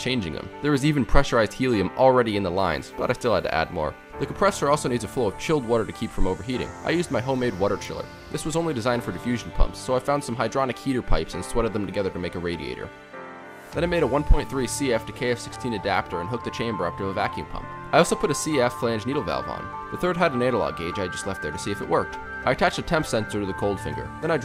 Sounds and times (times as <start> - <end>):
Speech: 0.0 - 12.9, 13.8 - 24.4
Music: 0.0 - 24.4.